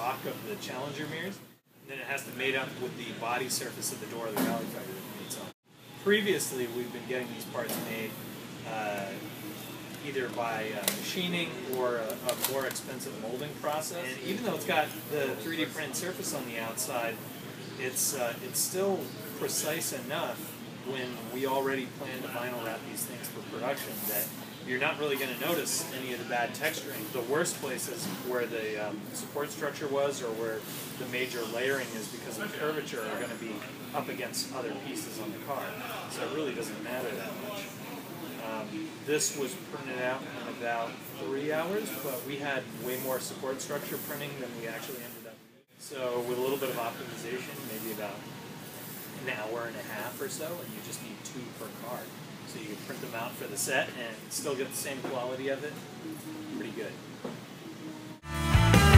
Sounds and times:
Speech: 0.0 - 9.4, 10.0 - 17.2, 17.8 - 55.8, 56.5 - 57.0.

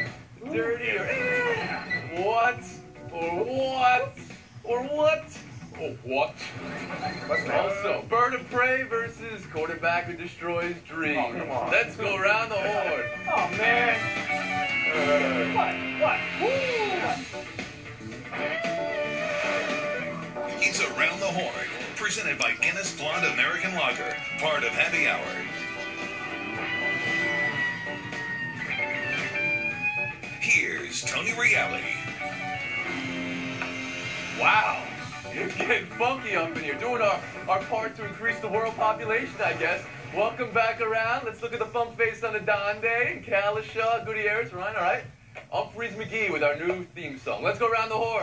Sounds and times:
Speech: 7.4 - 14.0
Theme music: 11.0 - 40.9.

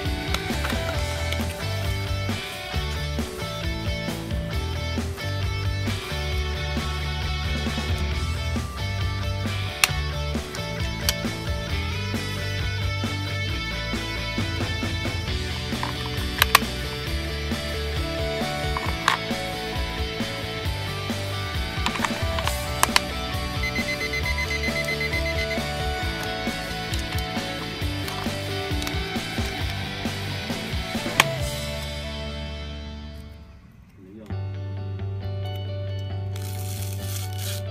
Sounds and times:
Music: 0.0 - 37.7
Alarm clock: 22.6 - 26.5.

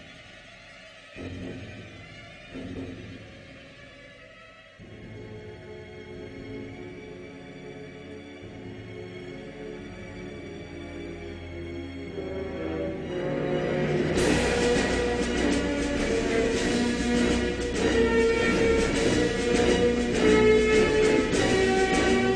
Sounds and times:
Music: 0.0 - 22.3.

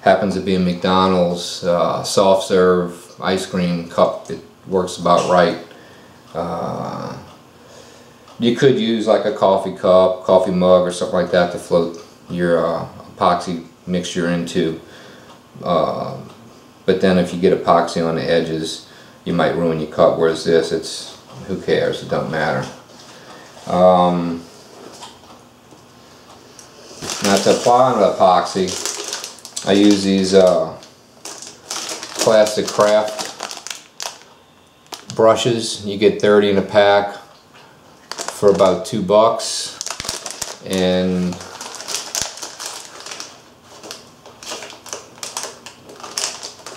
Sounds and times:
Speech: 0.0 - 5.7, 6.3 - 7.3, 8.4 - 14.9, 15.6 - 22.8, 23.6 - 24.5, 27.0 - 28.9, 29.6 - 30.9, 32.2 - 33.4, 35.1 - 37.4, 38.3 - 39.8, 40.6 - 41.5.

